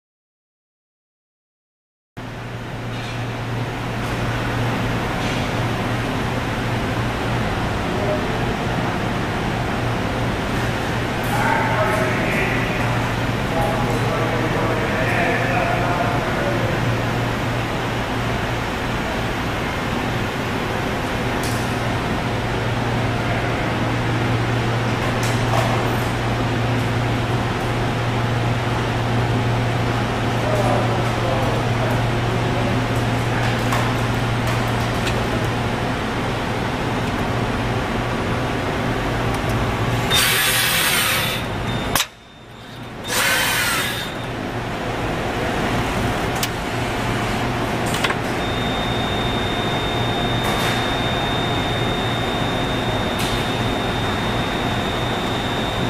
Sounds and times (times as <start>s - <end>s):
Speech: 7.9s - 8.8s, 11.2s - 17.0s, 30.4s - 33.0s.